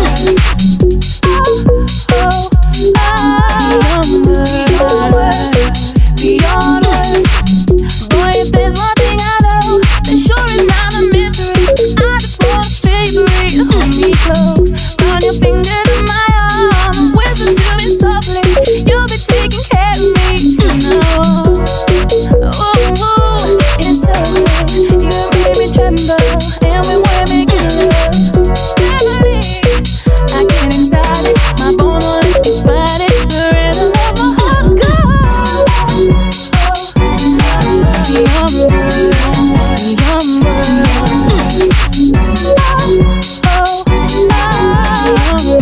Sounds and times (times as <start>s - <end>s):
Music: 0.0s - 45.6s.